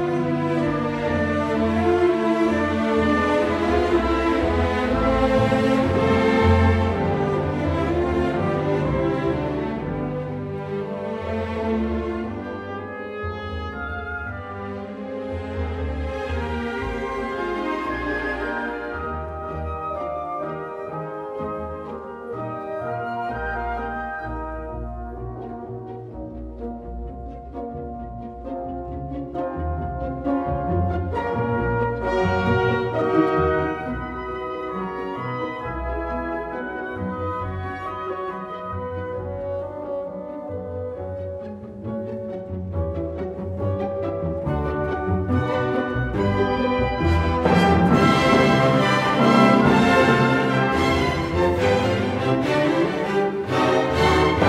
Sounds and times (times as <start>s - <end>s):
Music: 0.0s - 54.4s.